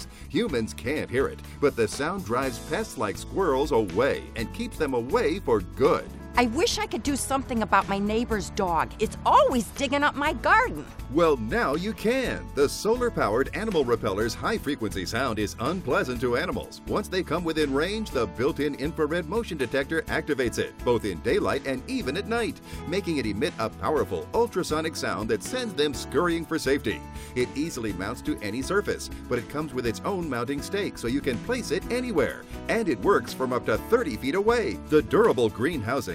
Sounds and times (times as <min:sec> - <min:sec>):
Music: 0:00.0 - 0:36.1
Speech: 0:00.0 - 0:36.1.